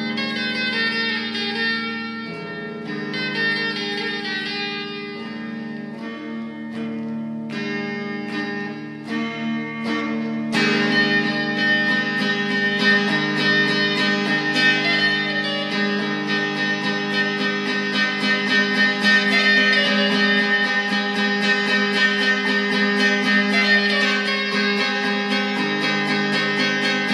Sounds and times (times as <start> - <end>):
Electric guitar: 0.0 - 27.1.